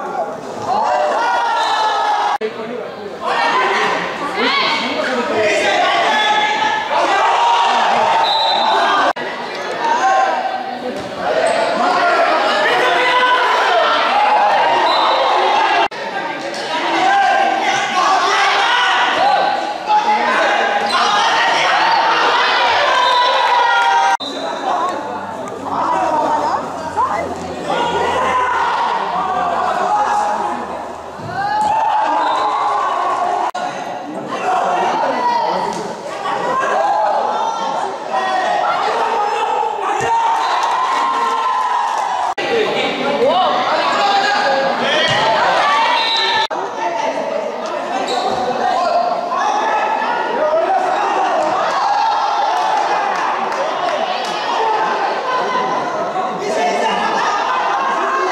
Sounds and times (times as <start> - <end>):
Inside, large room or hall: 0.0 - 58.3
Inside, public space: 0.0 - 58.3
Speech: 0.0 - 58.3.